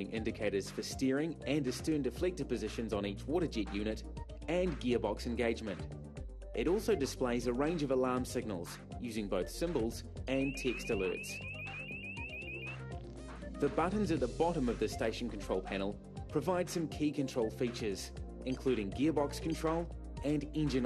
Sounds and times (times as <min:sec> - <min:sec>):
Speech: 0:00.0 - 0:05.9, 0:06.6 - 0:11.4, 0:13.6 - 0:20.8
Music: 0:00.0 - 0:20.8.